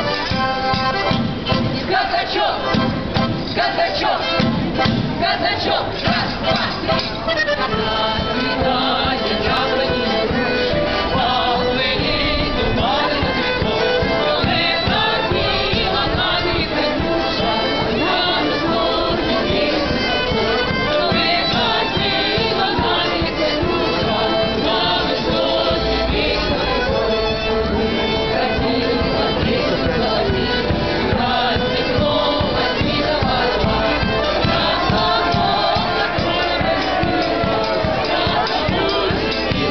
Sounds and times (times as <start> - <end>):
Music: 0.0 - 39.7.